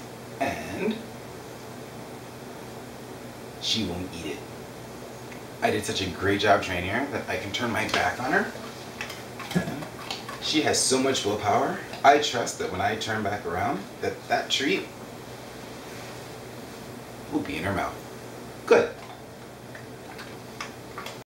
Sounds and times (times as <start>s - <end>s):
Speech: 0.4s - 1.1s, 3.6s - 4.5s, 5.6s - 8.6s, 10.4s - 14.9s, 17.3s - 18.0s, 18.7s - 19.0s.